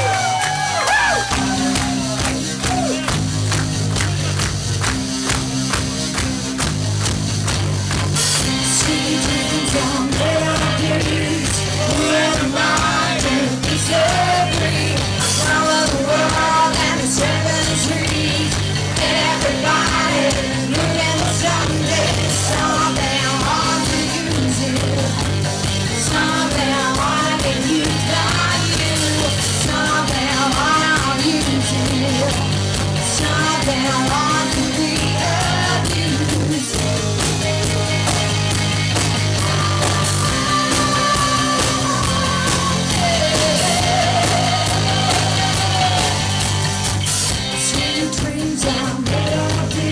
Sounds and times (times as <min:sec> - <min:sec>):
Music: 0:00.0 - 0:49.9.